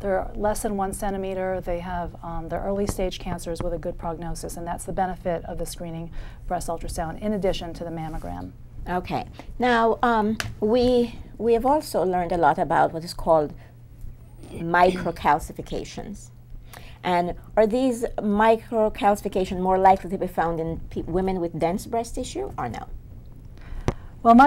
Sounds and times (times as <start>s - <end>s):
Speech: 0.0s - 13.6s, 14.4s - 16.3s, 17.0s - 22.9s, 24.2s - 24.4s.